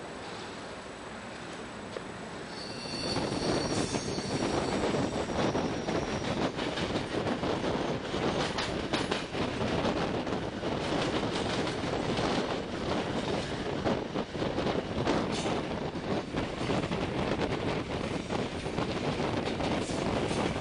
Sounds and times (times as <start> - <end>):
Train: 0.0 - 20.6.